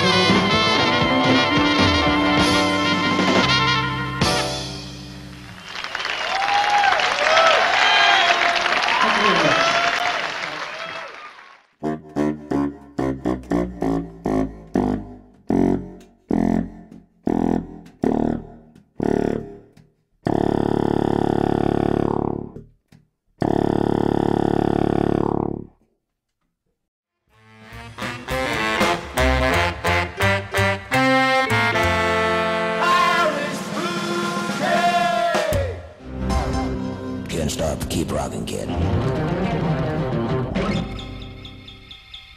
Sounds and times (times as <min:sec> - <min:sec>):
Saxophone: 0:00.0 - 0:04.6, 0:11.8 - 0:22.6, 0:23.4 - 0:25.6, 0:27.4 - 0:35.6.